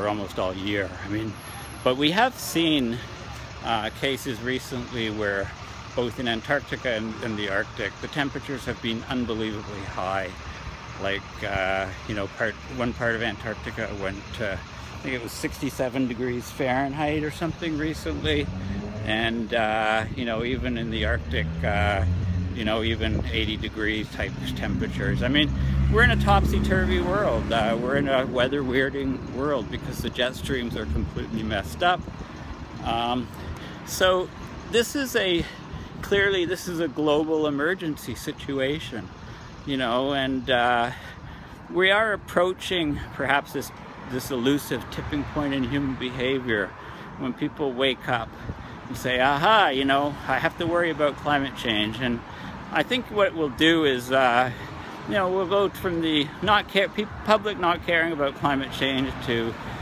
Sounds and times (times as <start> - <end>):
Speech: 0.0 - 10.4, 11.0 - 32.0, 32.8 - 33.3, 33.9 - 41.1, 41.7 - 59.6
Outside, urban or manmade: 0.0 - 59.8.